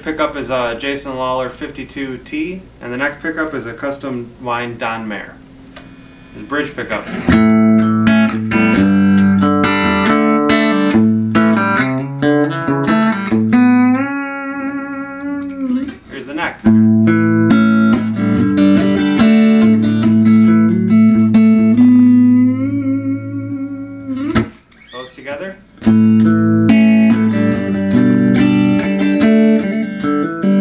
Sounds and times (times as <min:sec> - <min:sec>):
Speech: 0:00.0 - 0:05.4, 0:06.4 - 0:07.2, 0:16.1 - 0:16.7, 0:25.0 - 0:25.6
Electric guitar: 0:05.7 - 0:25.0, 0:25.7 - 0:30.6
Strum: 0:05.8 - 0:30.6.